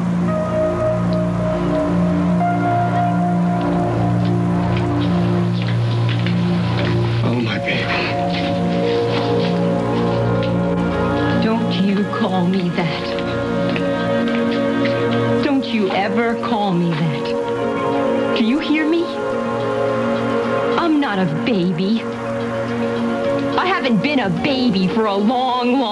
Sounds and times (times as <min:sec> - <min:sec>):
Music: 0:00.0 - 0:25.9.